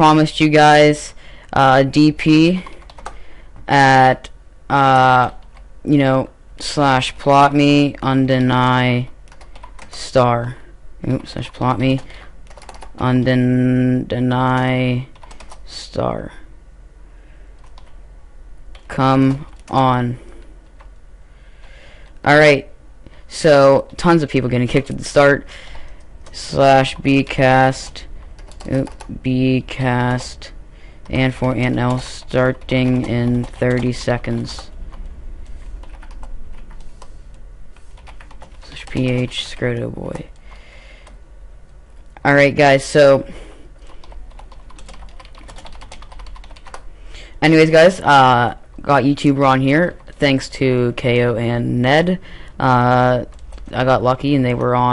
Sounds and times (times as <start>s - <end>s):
Speech: 0.0s - 2.7s, 3.7s - 9.2s, 9.9s - 12.1s, 13.0s - 16.5s, 18.9s - 20.2s, 22.2s - 22.7s, 23.3s - 25.5s, 26.3s - 34.7s, 38.6s - 40.4s, 42.2s - 43.3s, 47.4s - 54.9s
Computer keyboard: 2.6s - 3.2s, 9.3s - 10.0s, 11.1s - 13.0s, 14.5s - 15.6s, 17.6s - 18.0s, 27.8s - 29.1s, 31.0s - 35.0s, 35.8s - 37.1s, 38.0s - 41.2s, 43.8s - 46.8s.